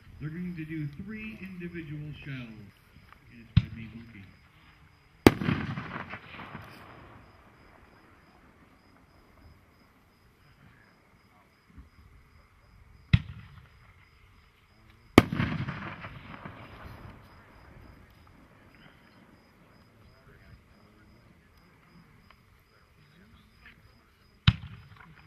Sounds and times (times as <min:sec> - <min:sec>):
Fireworks: 0:05.2 - 0:09.5, 0:13.0 - 0:14.1, 0:15.1 - 0:20.8, 0:23.6 - 0:25.2.